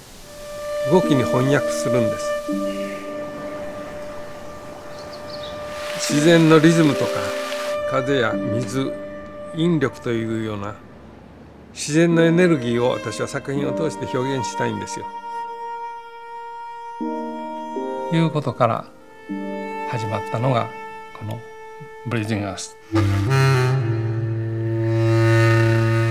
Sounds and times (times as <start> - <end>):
Music: 0.0 - 11.0, 12.0 - 26.1
Speech: 0.9 - 2.3, 6.0 - 9.0, 9.6 - 10.8, 11.8 - 15.1, 18.1 - 18.9, 19.9 - 22.8.